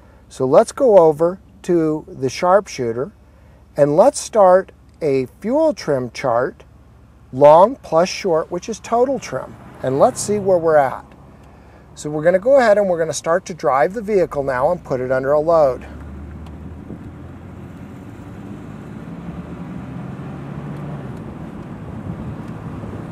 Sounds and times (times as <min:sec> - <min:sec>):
Speech: 0:00.3 - 0:03.2, 0:03.8 - 0:06.6, 0:07.3 - 0:11.1, 0:12.0 - 0:16.0.